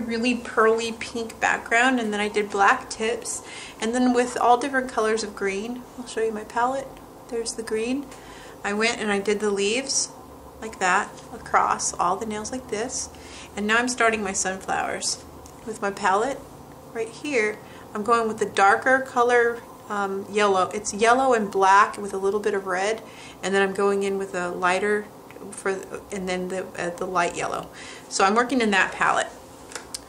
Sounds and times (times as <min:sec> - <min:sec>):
Speech: 0:00.0 - 0:16.4, 0:17.0 - 0:29.4.